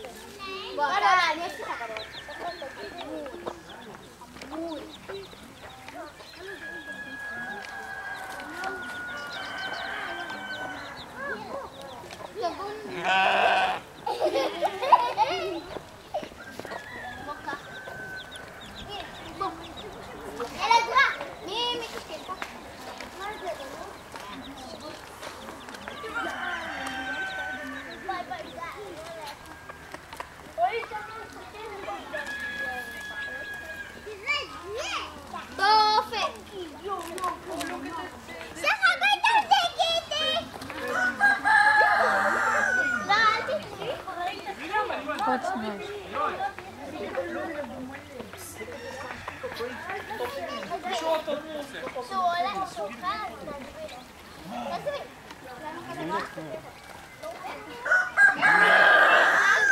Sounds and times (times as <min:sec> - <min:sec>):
Crowing, cock-a-doodle-doo: 0:01.4 - 0:03.3, 0:06.5 - 0:11.3, 0:16.4 - 0:18.8, 0:25.9 - 0:28.2, 0:32.2 - 0:34.2, 0:40.7 - 0:43.5, 0:48.7 - 0:50.6, 0:57.5 - 0:59.7.